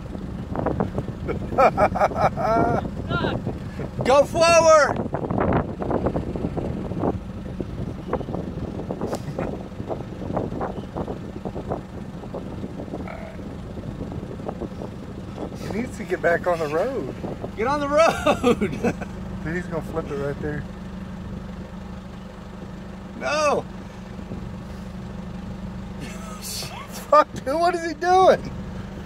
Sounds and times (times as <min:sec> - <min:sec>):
Outside, rural or natural: 0:00.0 - 0:29.0
Vehicle: 0:00.0 - 0:29.0.